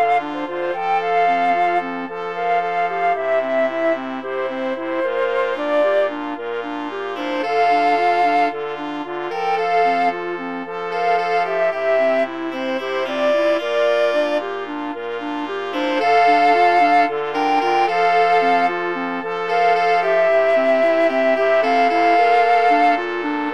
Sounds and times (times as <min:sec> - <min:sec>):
Brass instrument: 0:00.0 - 0:23.5
Clarinet: 0:00.0 - 0:23.5.